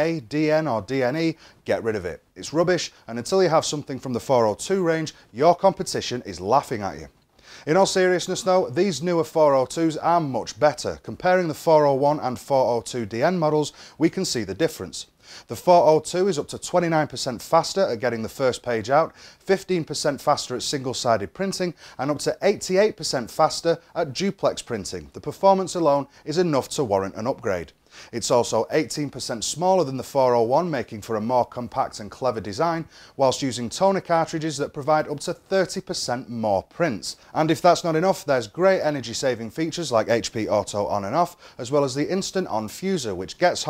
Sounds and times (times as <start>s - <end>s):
Speech: 0.0s - 43.7s.